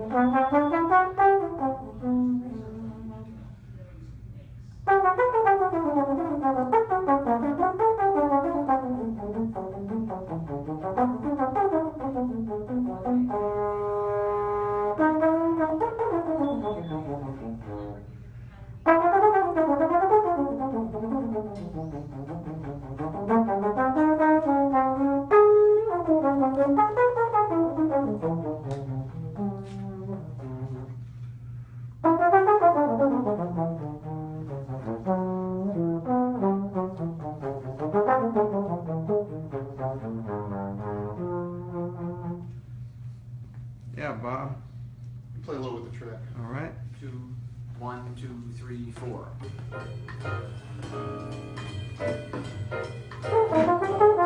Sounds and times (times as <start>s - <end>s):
Music: 0.0s - 43.7s, 48.9s - 54.2s.